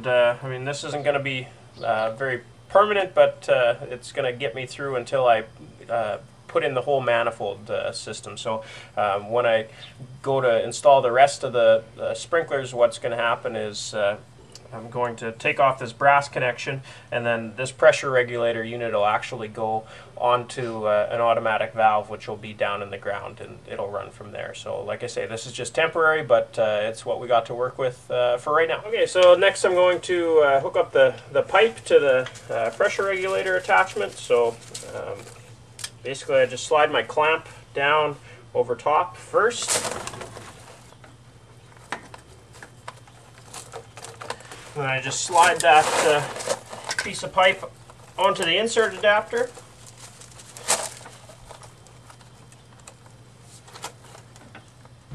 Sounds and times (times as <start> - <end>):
Speech: 0.0 - 35.4, 36.0 - 40.1, 44.8 - 49.6.